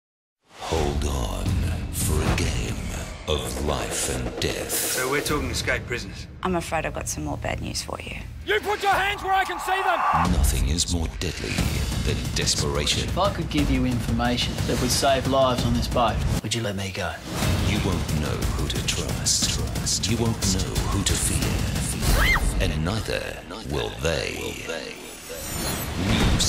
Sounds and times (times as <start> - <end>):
Female speech, woman speaking: 6.4 - 8.3.